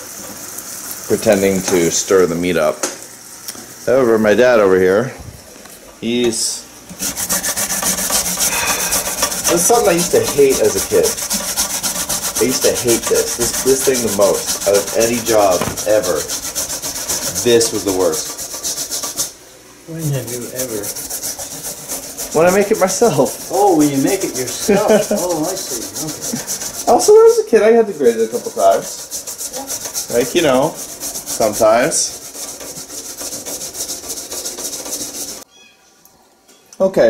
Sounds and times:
Rub: 6.9s - 35.5s
Filing (rasp): 7.0s - 19.3s, 20.3s - 27.4s, 28.0s - 35.4s.

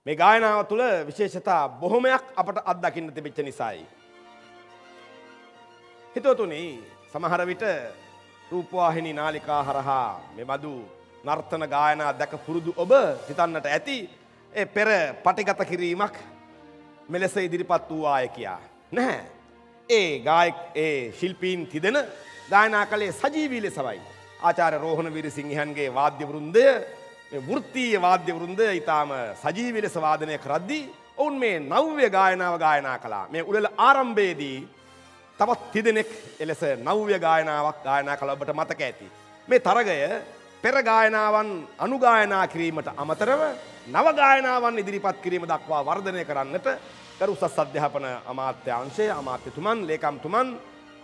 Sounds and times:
Speech: 0.0s - 3.9s, 6.2s - 7.9s, 8.5s - 16.3s, 17.1s - 19.3s, 19.9s - 34.7s, 35.4s - 50.6s
Music: 0.0s - 51.0s.

